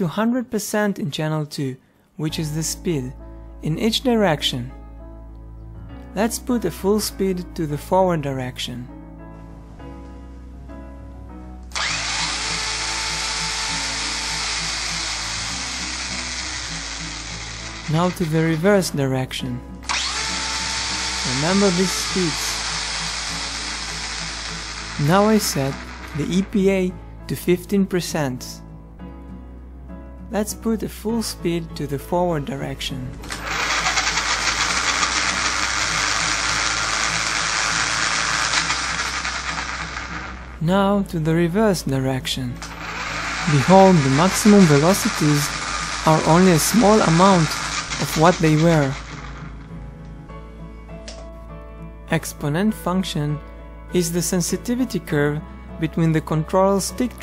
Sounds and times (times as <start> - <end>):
Speech: 0.0 - 4.7, 6.2 - 8.9, 17.9 - 19.6, 21.3 - 22.6, 25.0 - 28.6, 30.3 - 33.2, 40.6 - 42.6, 43.5 - 45.5, 46.1 - 49.0, 52.1 - 57.2
Music: 0.0 - 57.2.